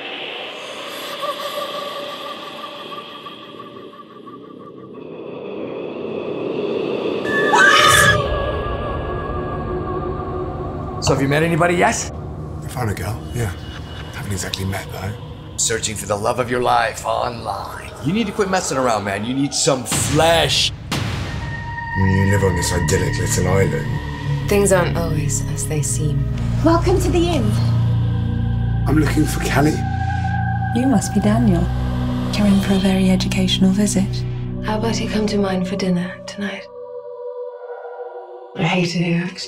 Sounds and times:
Speech: 14.2s - 20.7s, 22.0s - 26.2s, 28.9s - 29.9s.

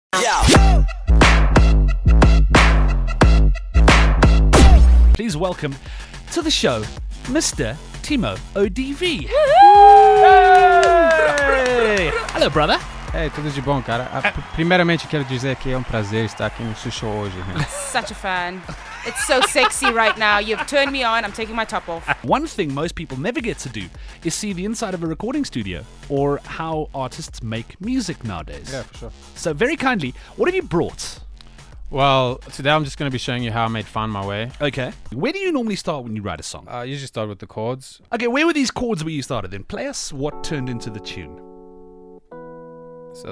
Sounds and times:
Music: 0.1s - 36.8s, 39.2s - 43.3s
Speech: 5.2s - 9.4s, 11.3s - 31.2s, 31.9s - 41.4s.

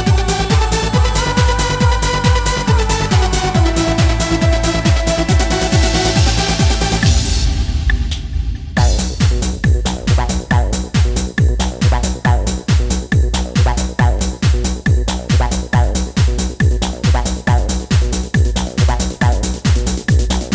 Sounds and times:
Techno: 0.0s - 20.5s
Trance music: 0.0s - 20.5s.

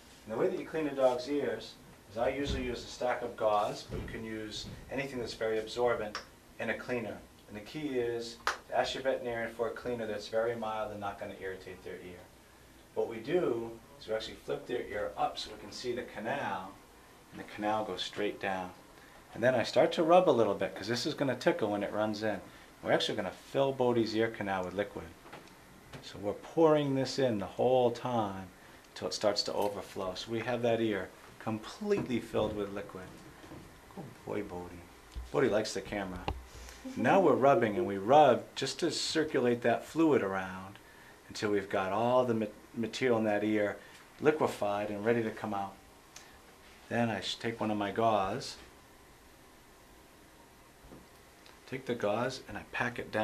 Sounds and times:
Speech: 0.3s - 12.3s, 13.0s - 25.2s, 26.0s - 33.2s, 34.0s - 45.8s, 46.9s - 48.7s, 51.7s - 53.2s.

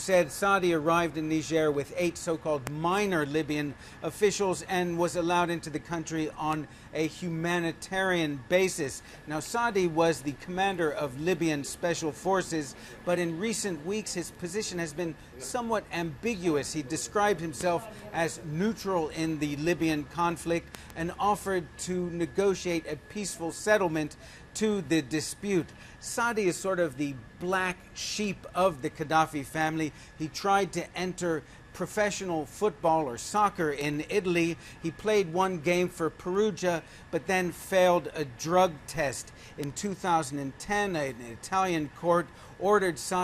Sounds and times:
Speech: 0.0s - 43.2s.

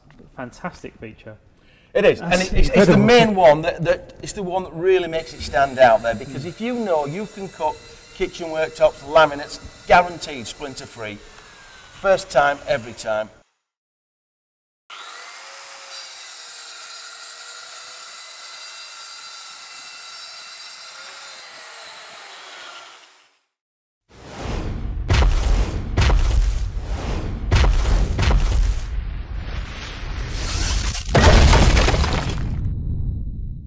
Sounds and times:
Power tool: 4.9s - 13.3s, 14.9s - 23.6s.

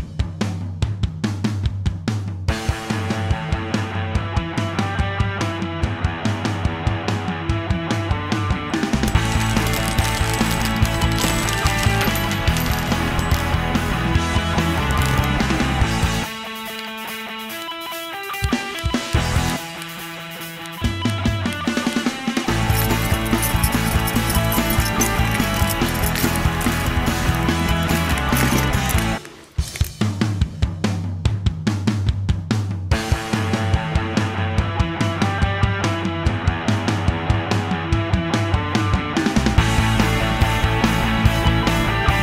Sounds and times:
Music: 0.0s - 42.2s.

